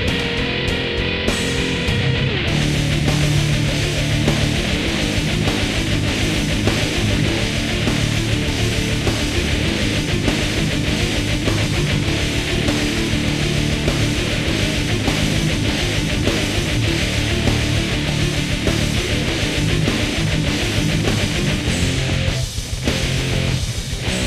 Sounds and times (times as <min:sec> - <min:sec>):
Music: 0:00.0 - 0:24.2.